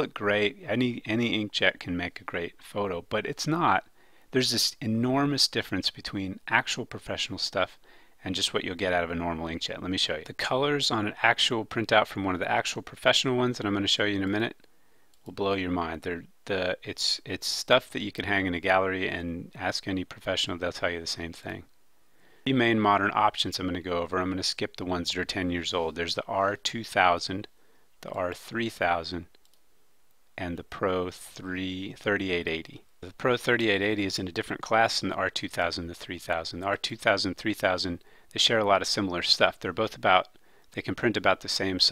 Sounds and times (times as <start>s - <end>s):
Speech: 0.0s - 14.6s, 15.3s - 21.7s, 22.5s - 29.4s, 30.4s - 41.9s.